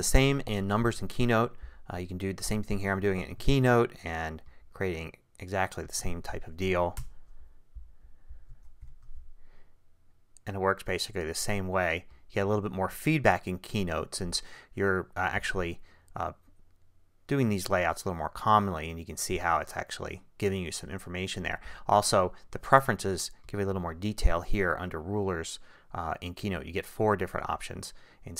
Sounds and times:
Speech: 0:00.0 - 0:07.0, 0:10.4 - 0:16.4, 0:17.3 - 0:28.3.

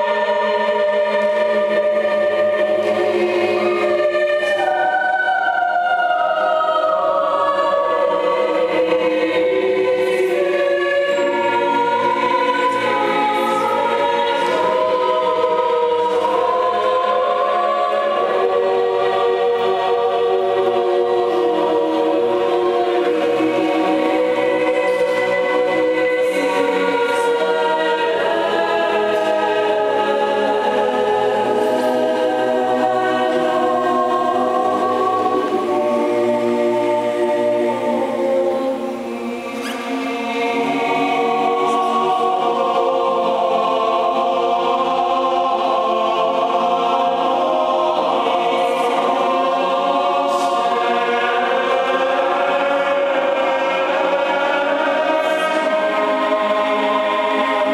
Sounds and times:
Choir: 0:00.0 - 0:57.7.

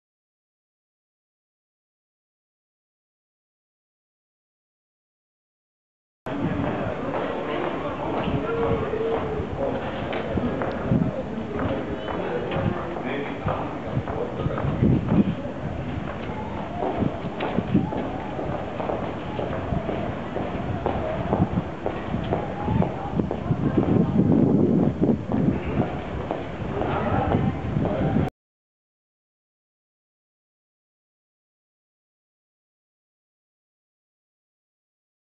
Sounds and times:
Speech: 0:06.3 - 0:28.3.

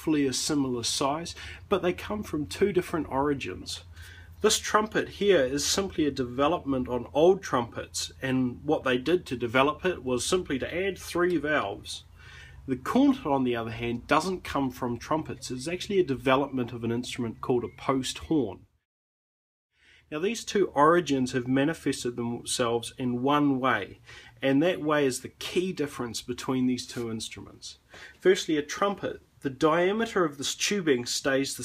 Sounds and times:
Speech: 0:00.0 - 0:12.1, 0:12.7 - 0:18.7, 0:20.1 - 0:31.6.

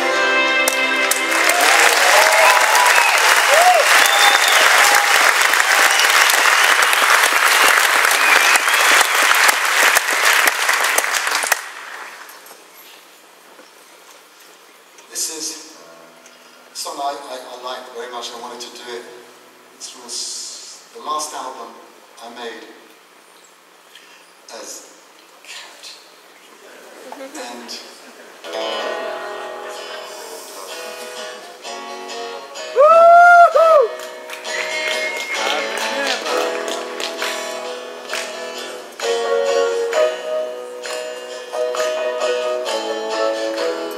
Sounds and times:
Music: 0:00.0 - 0:01.9, 0:28.4 - 0:43.9.

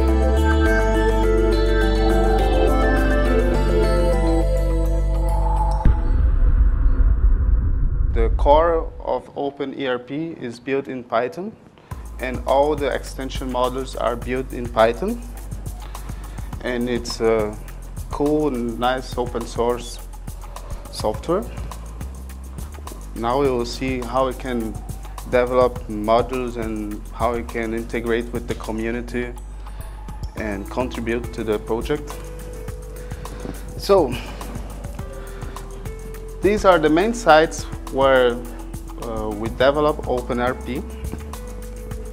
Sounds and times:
Music: 0:00.0 - 0:07.6, 0:11.9 - 0:42.1
Speech: 0:08.2 - 0:11.6, 0:12.2 - 0:15.3, 0:16.6 - 0:20.0, 0:20.9 - 0:21.6, 0:23.2 - 0:29.4, 0:30.4 - 0:32.2, 0:33.8 - 0:34.3, 0:36.4 - 0:40.9.

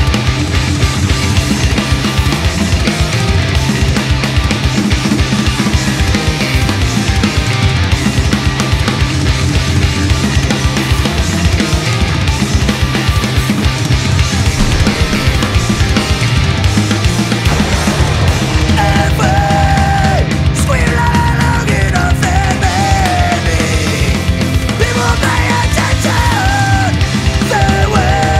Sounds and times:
Music: 0:00.0 - 0:28.3.

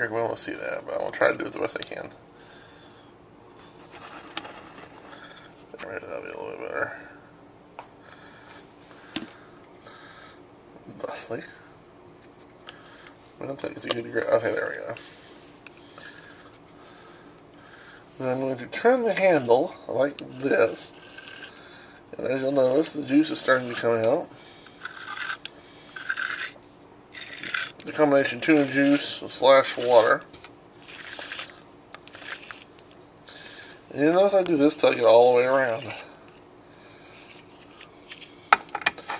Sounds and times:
Speech: 0:00.0 - 0:02.2, 0:05.7 - 0:07.2, 0:10.9 - 0:11.7, 0:13.4 - 0:15.0, 0:18.2 - 0:21.0, 0:22.1 - 0:24.3, 0:27.8 - 0:30.3, 0:33.9 - 0:36.1.

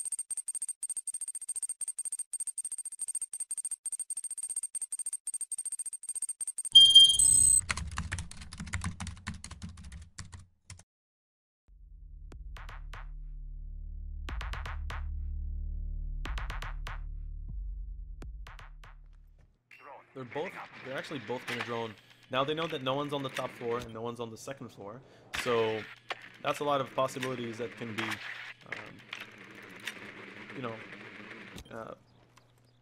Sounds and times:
Computer keyboard: 0:00.0 - 0:10.8.

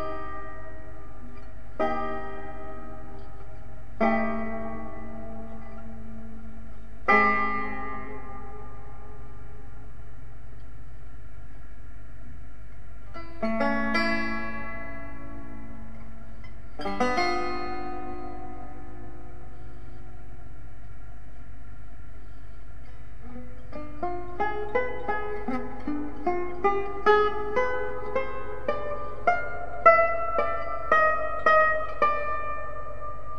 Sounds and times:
Banjo: 0:00.0 - 0:09.5, 0:13.1 - 0:20.1, 0:22.8 - 0:33.3.

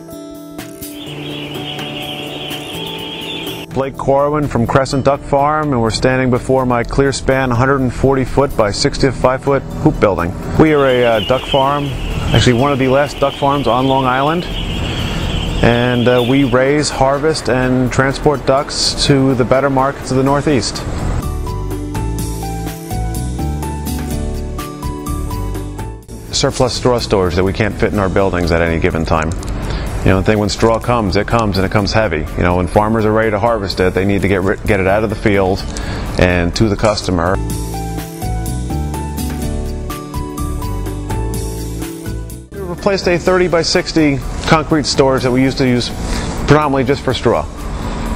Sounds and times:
Music: 0:00.0 - 0:48.1
Speech: 0:03.7 - 0:14.5, 0:15.6 - 0:20.8, 0:26.3 - 0:29.4, 0:30.0 - 0:37.4, 0:42.6 - 0:47.5.

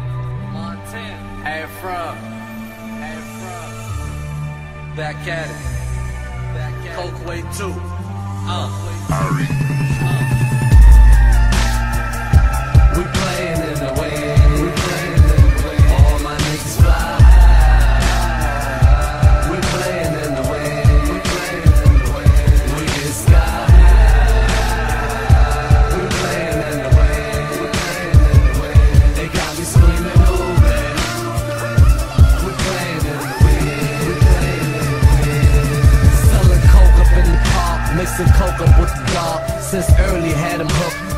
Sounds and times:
Music: 0:00.0 - 0:41.1.

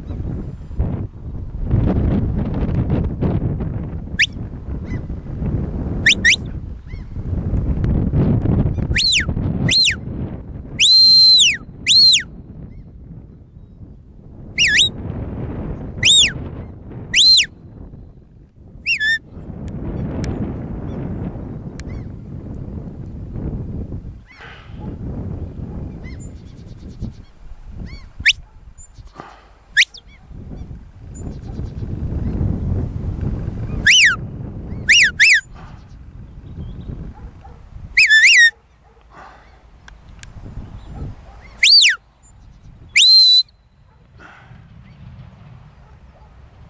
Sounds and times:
Outside, rural or natural: 0:00.0 - 0:46.6.

